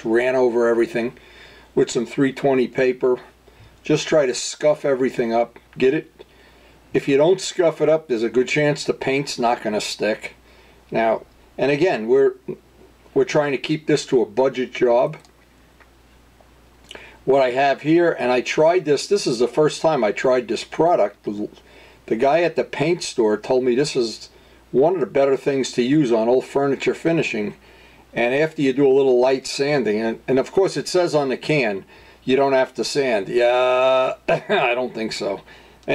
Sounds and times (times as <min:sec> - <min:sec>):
Speech: 0:00.0 - 0:01.2, 0:01.8 - 0:06.2, 0:06.9 - 0:15.3, 0:17.2 - 0:35.9.